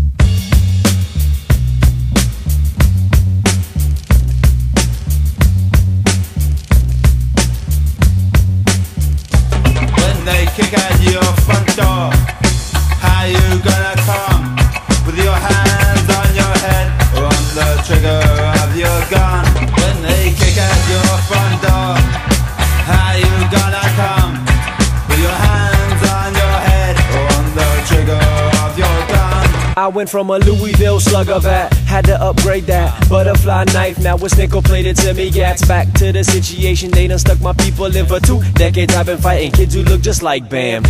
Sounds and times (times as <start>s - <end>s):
Reggae: 0.0s - 40.9s.